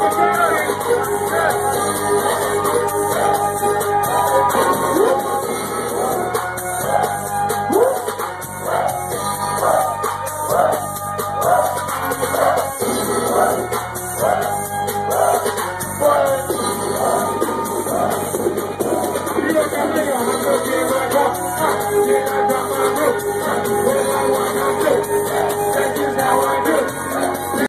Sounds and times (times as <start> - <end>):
Music: 0.0 - 27.6.